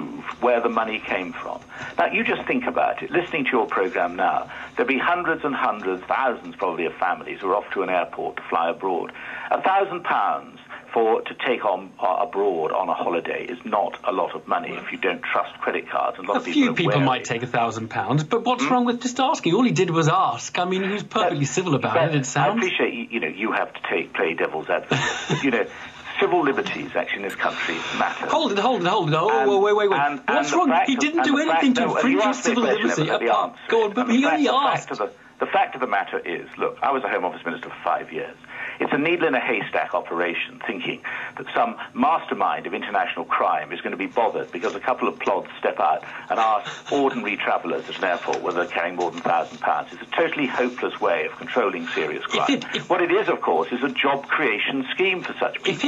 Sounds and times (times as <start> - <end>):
Radio: 0.0 - 55.8
Speech: 0.0 - 55.8.